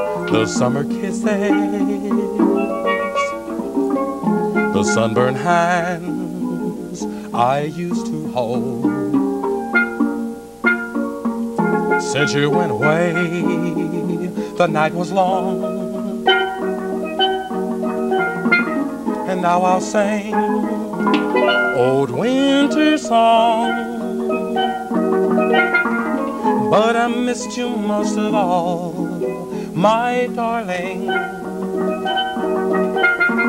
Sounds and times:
Steelpan: 0:00.0 - 0:33.4.

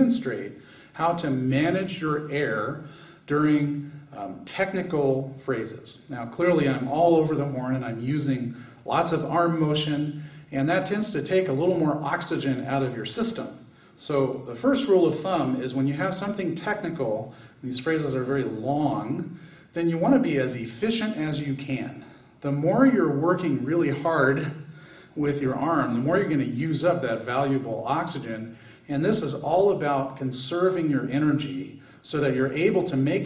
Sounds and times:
Speech: 0:00.0 - 0:33.2.

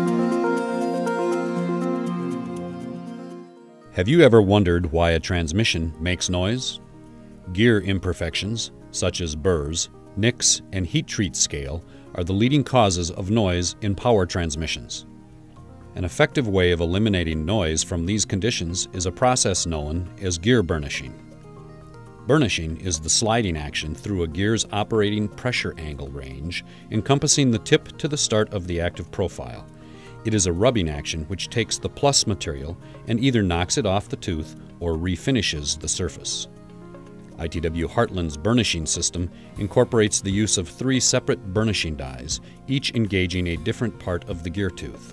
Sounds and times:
Music: 0:00.0 - 0:45.1
Speech: 0:04.0 - 0:06.8, 0:07.5 - 0:15.1, 0:16.0 - 0:21.2, 0:22.3 - 0:36.5, 0:37.4 - 0:45.1.

